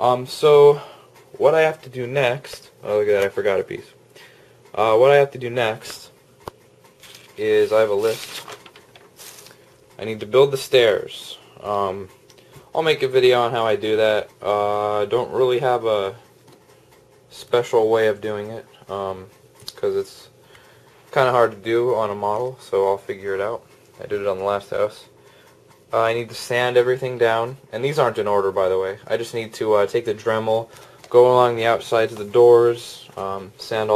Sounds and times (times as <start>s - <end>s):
Speech: 0.0s - 4.0s, 4.7s - 6.2s, 7.4s - 8.4s, 10.0s - 12.1s, 12.8s - 16.2s, 17.3s - 20.4s, 21.1s - 25.2s, 25.9s - 33.9s
Inside, small room: 0.0s - 33.9s.